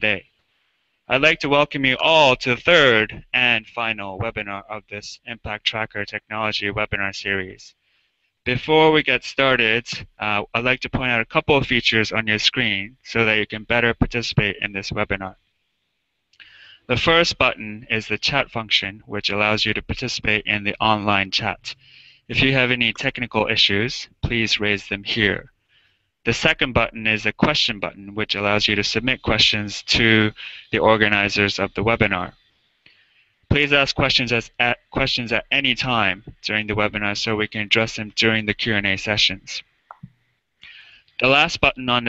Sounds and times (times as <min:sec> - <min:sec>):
Speech: 0:00.0 - 0:00.3, 0:01.1 - 0:07.8, 0:08.4 - 0:15.4, 0:16.4 - 0:25.5, 0:26.2 - 0:32.4, 0:33.5 - 0:40.1, 0:40.7 - 0:42.0.